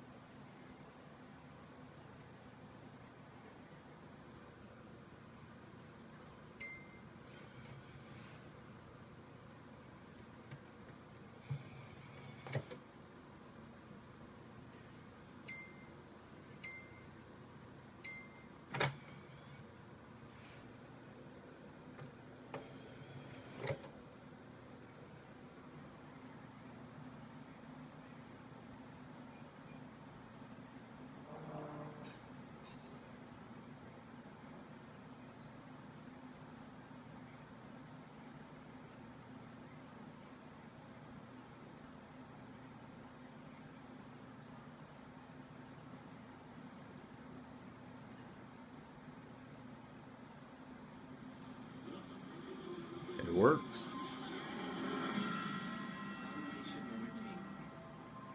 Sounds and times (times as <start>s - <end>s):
Inside, small room: 0.0s - 58.3s.